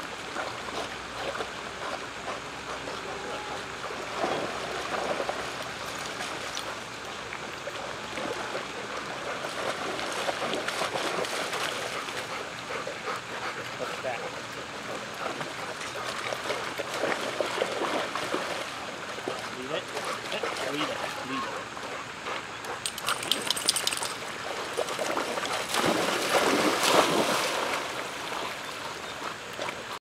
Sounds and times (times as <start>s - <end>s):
Stream: 0.0s - 30.0s.